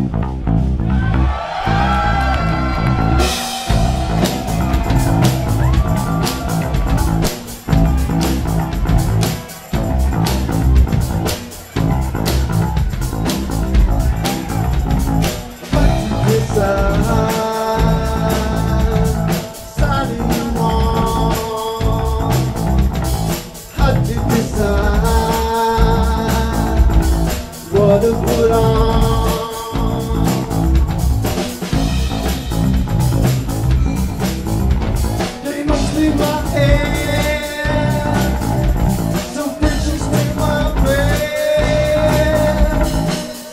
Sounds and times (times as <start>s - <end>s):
Music: 0.0s - 43.5s.